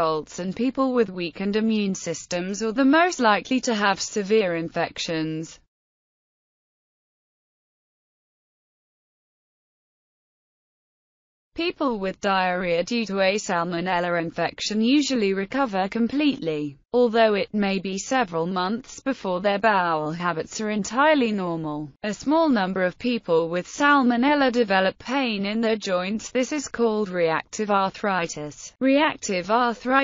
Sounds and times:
Speech: 0.0 - 5.7, 11.6 - 30.0.

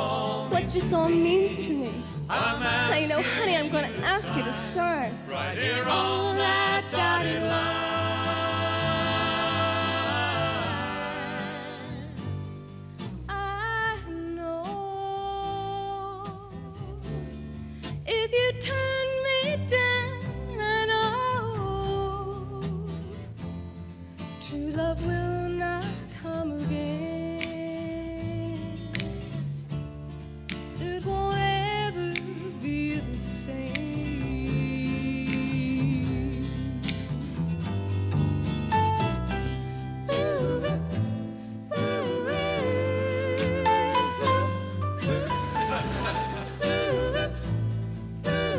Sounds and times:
Country: 0.0 - 48.5.

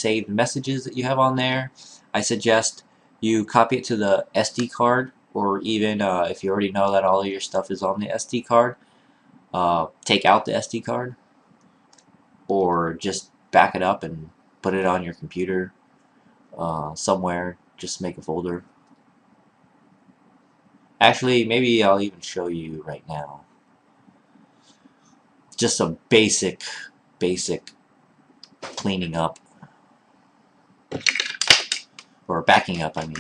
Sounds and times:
Speech: 0.0 - 8.8, 9.6 - 11.2, 12.5 - 15.7, 16.6 - 18.6, 21.0 - 23.4, 25.6 - 27.7, 28.5 - 29.4, 32.3 - 33.2
Inside, small room: 0.0 - 33.2.

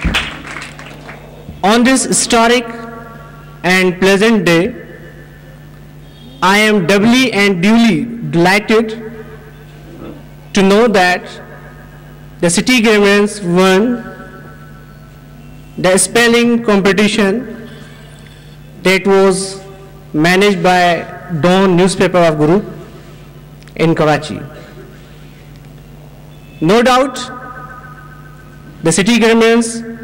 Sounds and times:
Narration, monologue: 1.6 - 30.0.

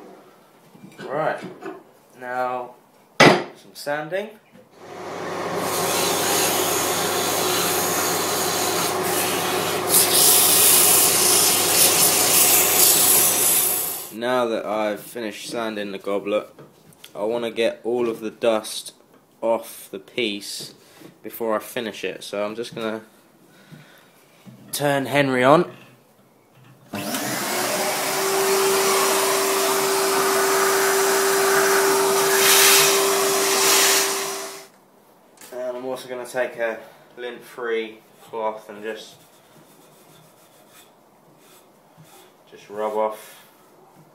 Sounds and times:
Speech: 1.0 - 1.6, 2.2 - 2.8, 3.6 - 4.4, 14.1 - 23.1, 24.7 - 25.8, 35.4 - 39.2, 42.5 - 43.5
Blender: 4.8 - 14.1, 27.0 - 34.7.

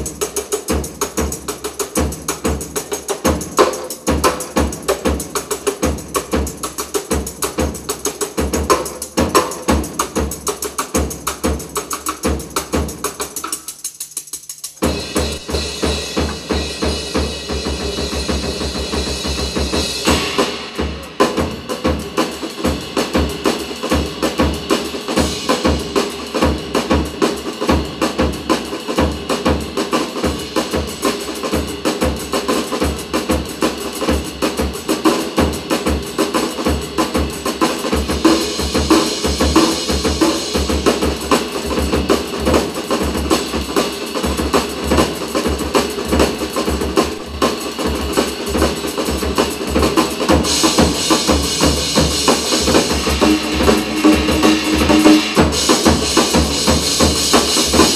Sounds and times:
Cymbal: 0.0 - 57.9
Drum kit: 0.0 - 57.9
Snare drum: 0.0 - 57.9
Bass drum: 14.7 - 22.8, 49.7 - 57.9.

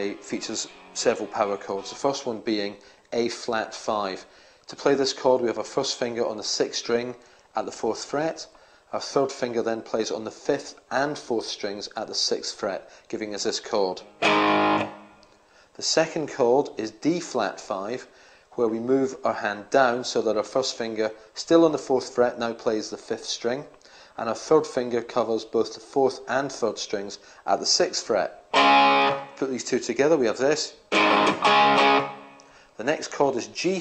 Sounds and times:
Speech: 0.0 - 14.1, 15.8 - 28.4, 29.4 - 30.8, 32.8 - 33.8.

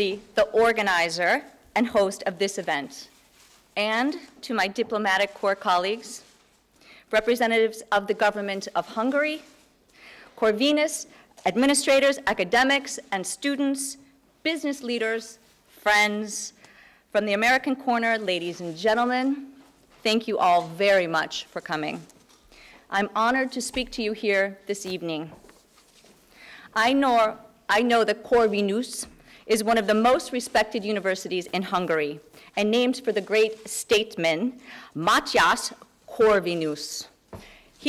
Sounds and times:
Speech: 0.0 - 3.1, 3.8 - 6.3, 7.1 - 9.5, 10.4 - 22.1, 22.9 - 25.4, 26.8 - 37.2.

